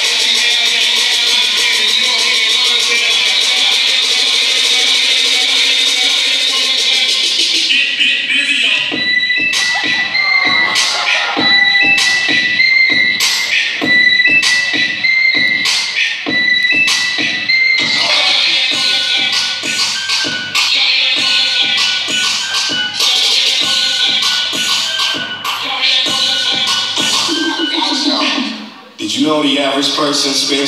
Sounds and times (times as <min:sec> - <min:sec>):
Music: 0:00.0 - 0:29.2
Inside, large room or hall: 0:00.0 - 0:30.6
Inside, public space: 0:00.0 - 0:30.6.